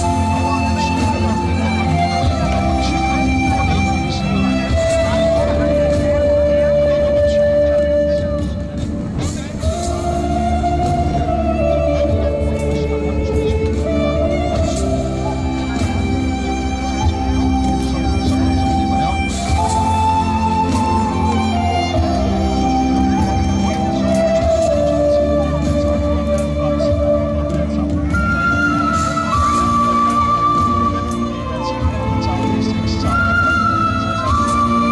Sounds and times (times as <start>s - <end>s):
Flute: 0.0s - 34.9s
Speech: 0.0s - 34.9s.